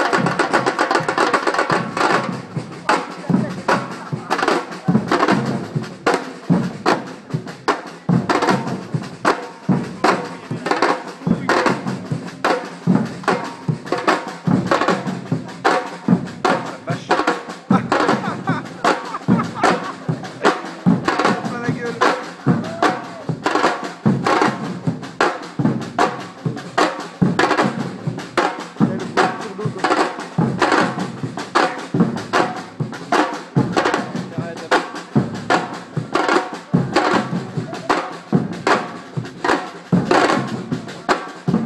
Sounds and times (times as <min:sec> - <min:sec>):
Percussion: 0:00.0 - 0:41.6
Speech: 0:02.8 - 0:05.2, 0:09.9 - 0:11.8, 0:16.5 - 0:18.2, 0:20.0 - 0:23.3, 0:28.8 - 0:30.0, 0:34.2 - 0:35.0.